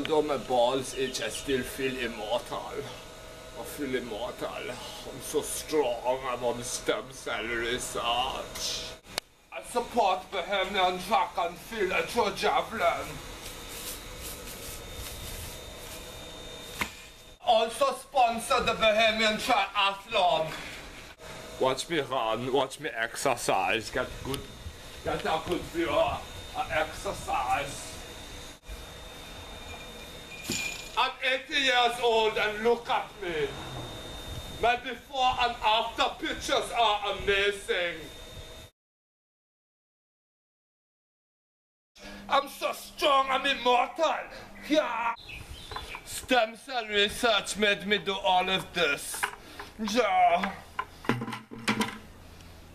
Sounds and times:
Speech: 0.0 - 3.0, 3.6 - 9.0, 9.6 - 13.2, 17.4 - 20.6, 21.6 - 28.0, 31.0 - 33.6, 34.6 - 38.1, 42.0 - 45.2, 46.1 - 50.6.

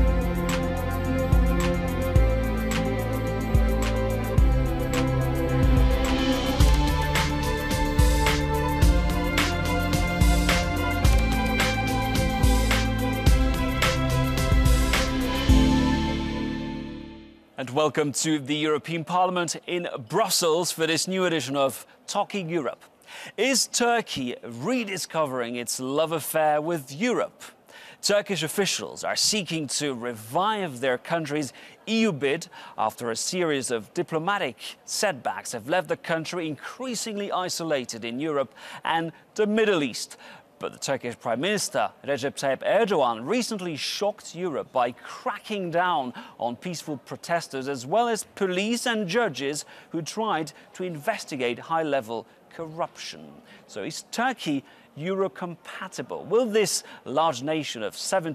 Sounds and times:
Speech: 17.6 - 58.3.

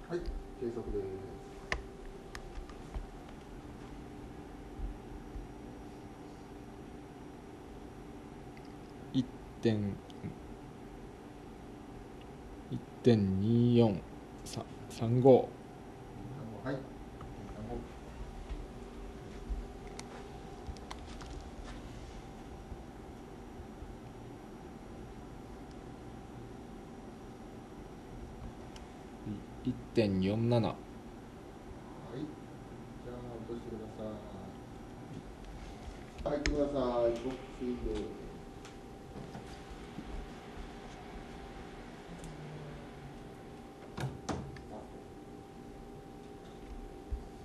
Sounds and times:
Speech: 0.0 - 1.4, 9.2 - 10.0, 12.7 - 15.6, 16.3 - 17.9, 29.2 - 30.8, 32.0 - 32.4, 33.0 - 34.6, 36.2 - 38.3.

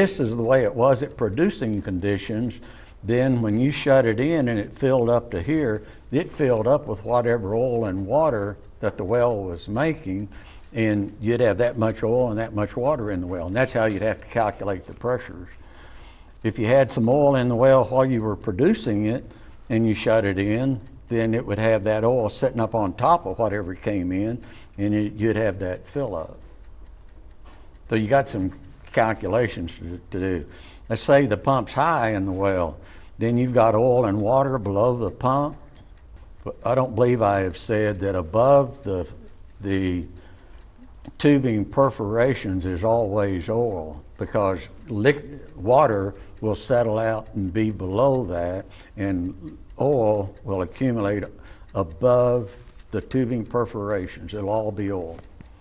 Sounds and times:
Speech: 0.0 - 15.6, 16.4 - 26.4, 27.9 - 35.7, 36.4 - 40.2, 41.1 - 55.3.

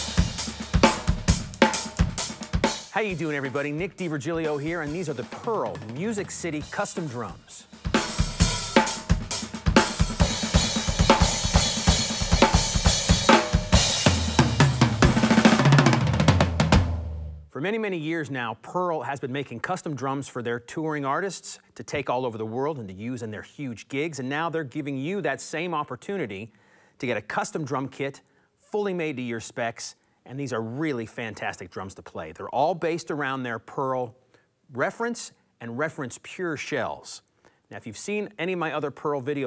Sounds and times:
Music: 0.0 - 17.5
Speech: 2.9 - 7.7, 17.5 - 39.4.

